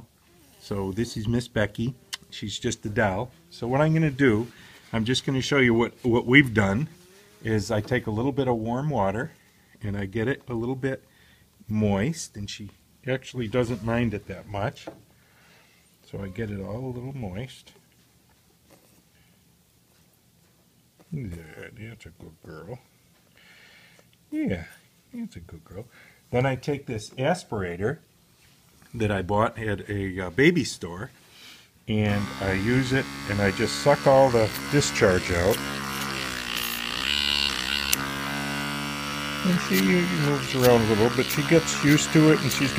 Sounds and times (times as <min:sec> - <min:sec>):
Speech: 0:00.6 - 0:15.0, 0:16.1 - 0:17.8, 0:21.1 - 0:22.9, 0:24.3 - 0:28.1, 0:28.9 - 0:31.2, 0:31.9 - 0:35.7, 0:39.4 - 0:42.7.